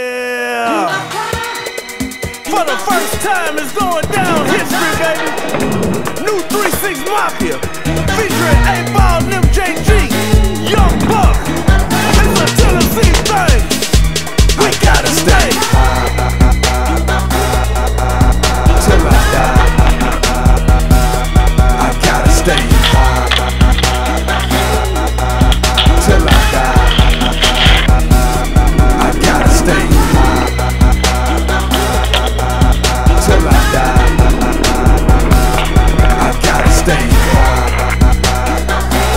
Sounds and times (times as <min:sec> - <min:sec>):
Music: 0:00.0 - 0:39.1.